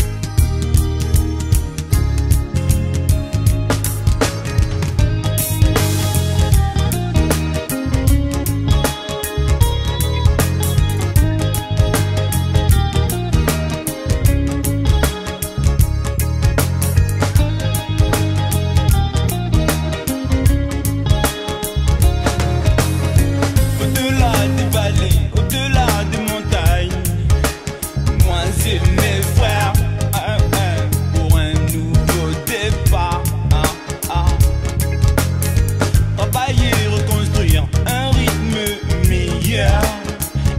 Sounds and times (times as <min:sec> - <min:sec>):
Music: 0:00.0 - 0:40.5.